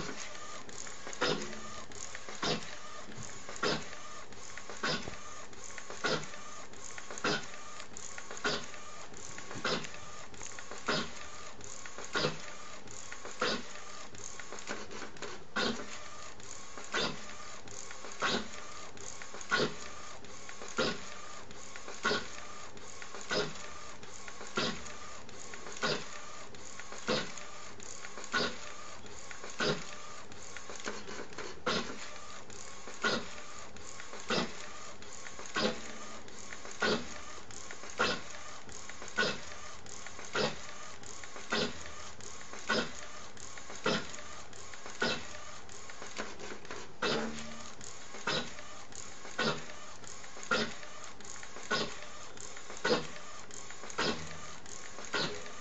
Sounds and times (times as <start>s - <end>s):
Printer: 0.0s - 55.6s.